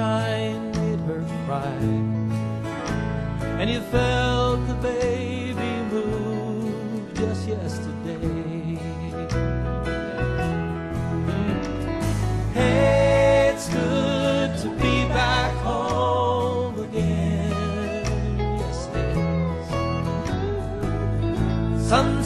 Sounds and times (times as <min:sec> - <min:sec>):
Christmas music: 0:00.0 - 0:22.2.